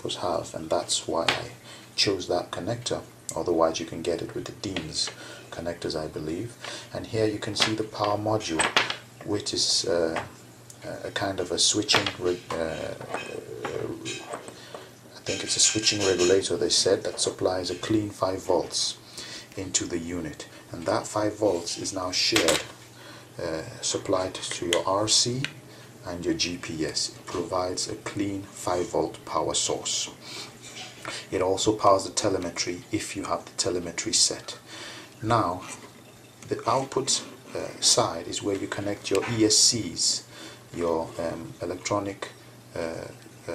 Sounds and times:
Speech: 0:00.0 - 0:14.3, 0:15.2 - 0:22.8, 0:23.4 - 0:30.2, 0:30.8 - 0:35.8, 0:36.4 - 0:43.5
Inside, small room: 0:00.0 - 0:43.5.

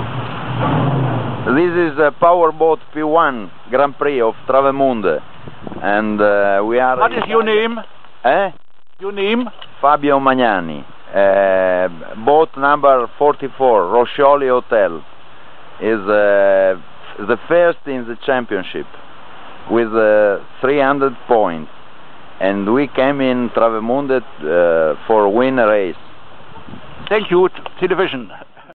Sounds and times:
Speech: 0:01.5 - 0:05.2, 0:05.8 - 0:15.0, 0:15.8 - 0:18.9, 0:19.7 - 0:21.7, 0:22.4 - 0:26.0, 0:27.1 - 0:28.4.

